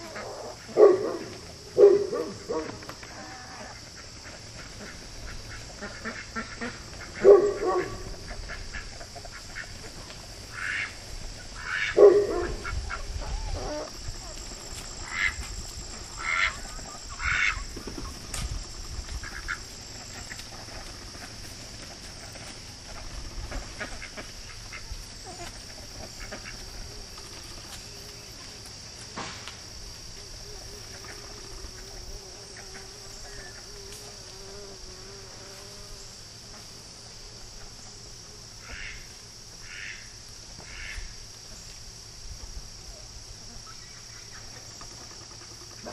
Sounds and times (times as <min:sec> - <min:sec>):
Cricket: 0:00.0 - 0:45.9
Fly, housefly: 0:00.0 - 0:45.9.